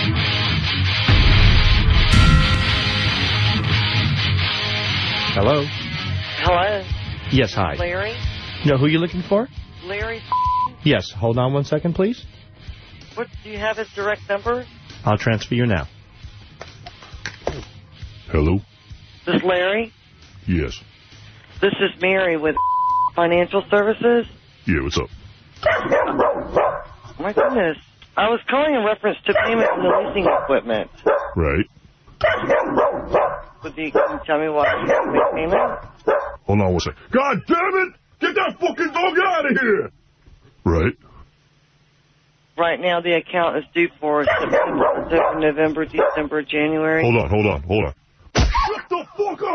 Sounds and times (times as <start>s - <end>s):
Bow-wow: 25.6s - 27.6s, 29.3s - 31.4s, 32.2s - 36.4s, 44.2s - 46.3s.